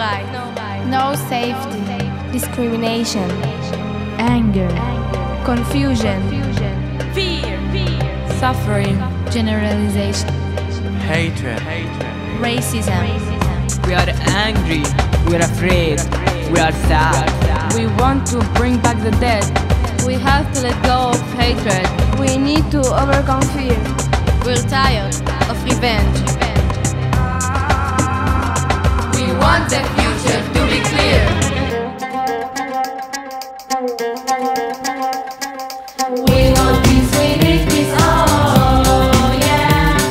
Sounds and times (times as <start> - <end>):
Speech: 0.0 - 10.3, 11.0 - 23.9, 24.5 - 26.7
Music: 0.0 - 40.1.